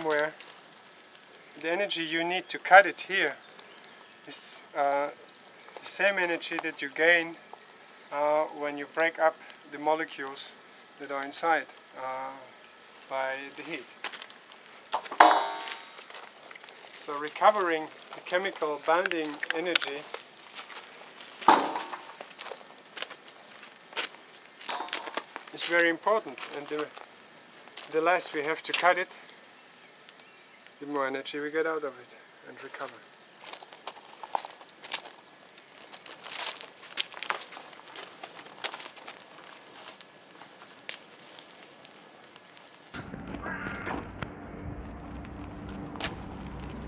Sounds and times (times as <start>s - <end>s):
Fire: 0.0s - 46.8s.